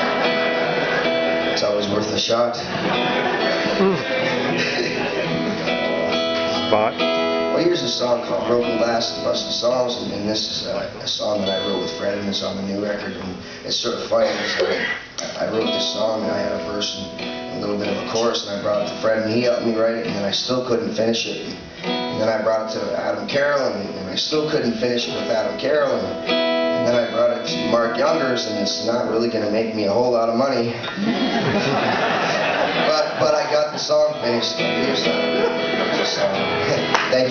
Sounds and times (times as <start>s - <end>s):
Music: 0.0s - 14.0s, 15.3s - 37.3s
Speech: 7.6s - 21.6s, 22.2s - 26.1s, 26.8s - 30.8s, 32.9s - 35.2s, 36.0s - 37.3s.